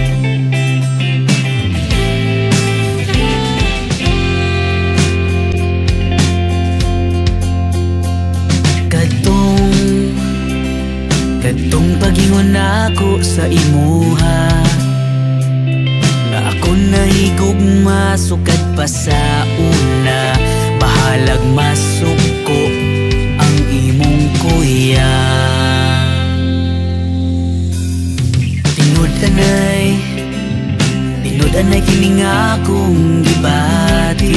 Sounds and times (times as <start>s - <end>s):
Music: 0.0s - 34.3s.